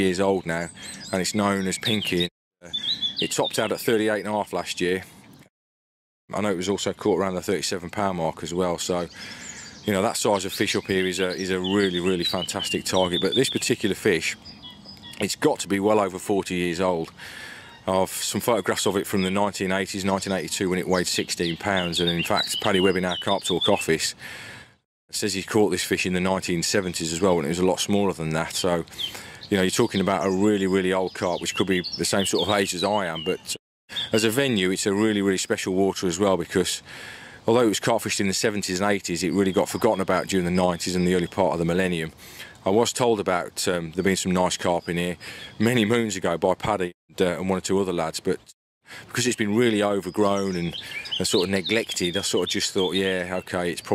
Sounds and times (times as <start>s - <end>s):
Speech: 0.0s - 5.1s, 6.3s - 9.2s, 9.8s - 14.4s, 15.2s - 17.1s, 17.8s - 24.2s, 25.1s - 28.9s, 29.5s - 36.8s, 37.5s - 53.9s.